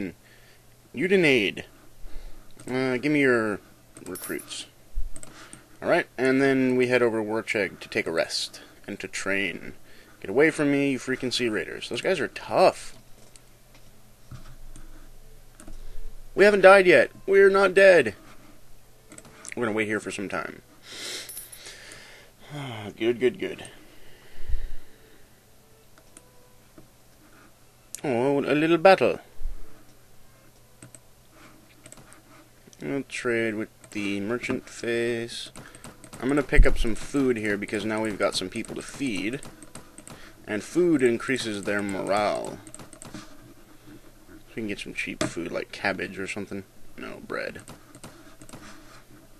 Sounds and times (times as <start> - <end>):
Speech: 1.0 - 1.7, 2.6 - 4.7, 5.8 - 13.0, 16.4 - 18.2, 19.5 - 20.6, 22.5 - 23.8, 28.0 - 29.3, 32.8 - 35.5, 36.2 - 39.4, 40.5 - 42.6, 44.5 - 47.6.